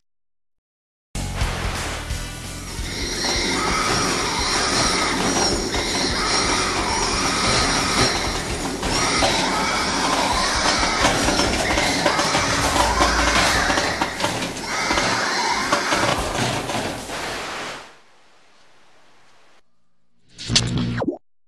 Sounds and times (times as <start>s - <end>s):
Music: 1.2s - 15.0s.